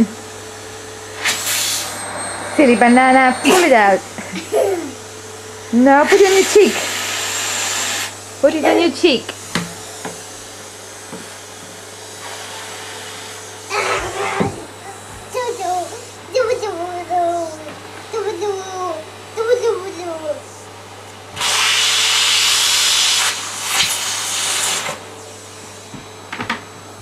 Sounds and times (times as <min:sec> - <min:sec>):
Vacuum cleaner: 0:00.0 - 0:27.0.